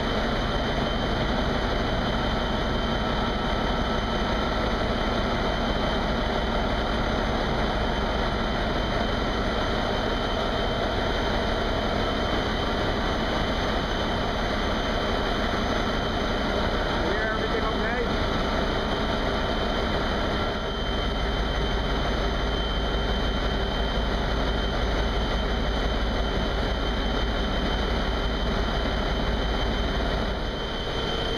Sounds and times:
Engine: 0.0 - 31.3.

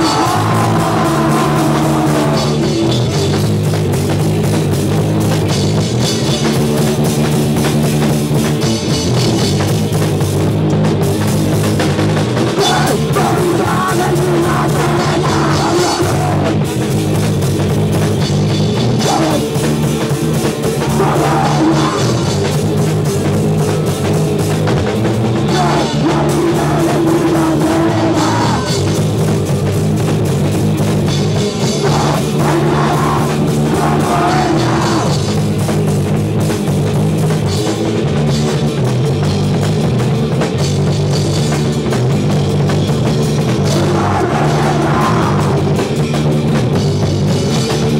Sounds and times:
Drum kit: 0.0 - 47.9
Punk rock: 0.0 - 47.9.

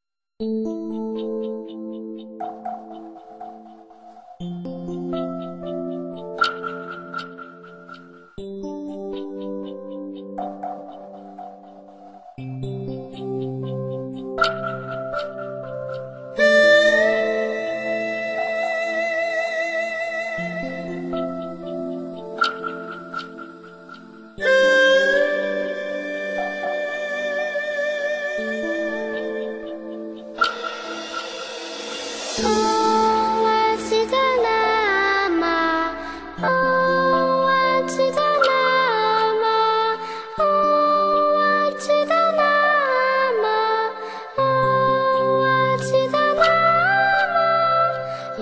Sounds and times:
Mantra: 32.4 - 48.4.

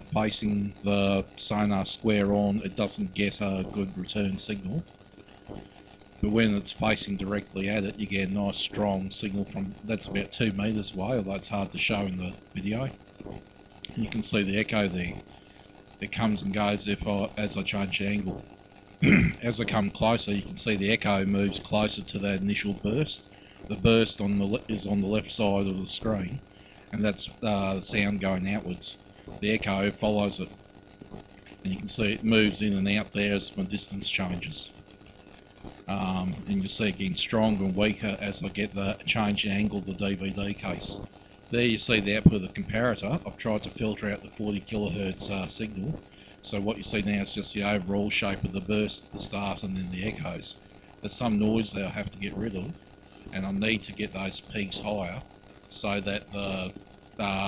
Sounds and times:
Speech: 0.0 - 4.9, 6.2 - 13.0, 13.9 - 15.2, 16.0 - 18.4, 19.0 - 30.5, 31.6 - 34.8, 35.9 - 57.4.

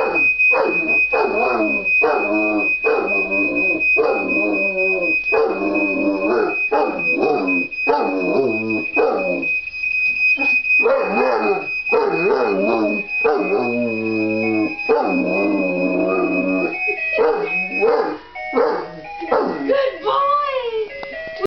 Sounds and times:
Buzzer: 0.0 - 20.0
Music: 18.3 - 21.4
Speech: 19.6 - 21.4.

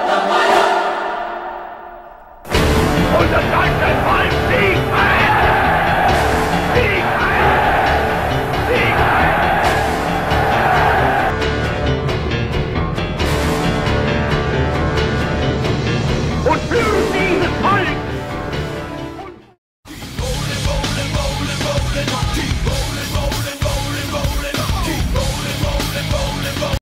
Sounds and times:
Music: 0.0 - 26.8
Speech: 3.1 - 5.4, 6.8 - 7.5, 16.4 - 18.1.

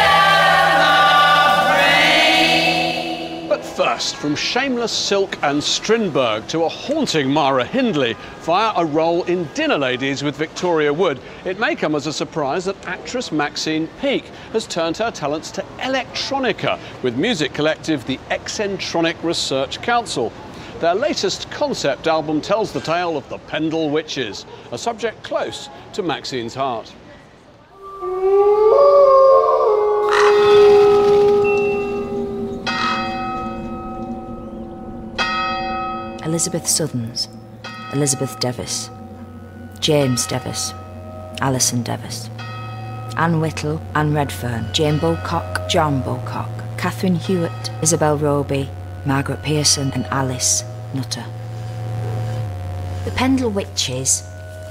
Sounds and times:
Music: 0.0 - 6.0, 31.5 - 54.7
Speech: 36.2 - 37.3, 41.4 - 42.3, 43.2 - 51.3, 53.1 - 54.2.

